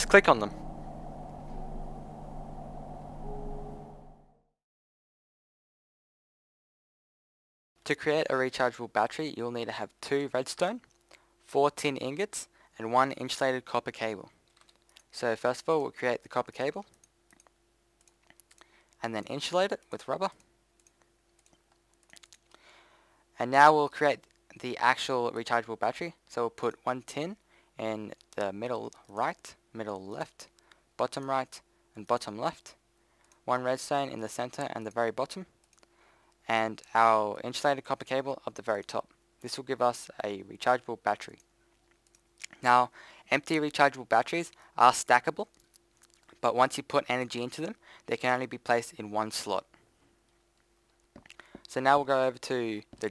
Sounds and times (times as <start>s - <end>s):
Speech: 0.0s - 0.5s, 7.8s - 10.8s, 11.5s - 14.3s, 15.1s - 16.9s, 19.0s - 20.4s, 23.4s - 32.8s, 33.5s - 35.5s, 36.5s - 41.4s, 42.5s - 45.5s, 46.4s - 49.7s, 51.7s - 53.1s.